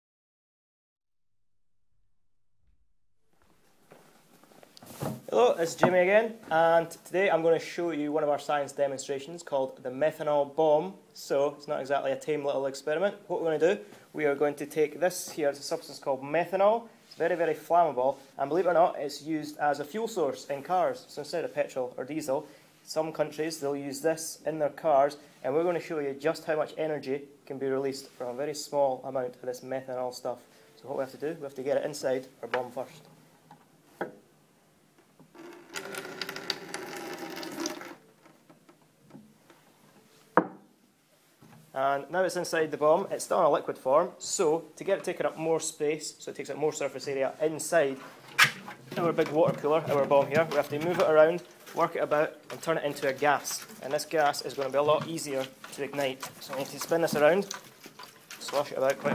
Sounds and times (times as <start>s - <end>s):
Speech: 5.3s - 33.1s, 41.7s - 48.1s, 48.9s - 57.6s, 58.4s - 59.1s.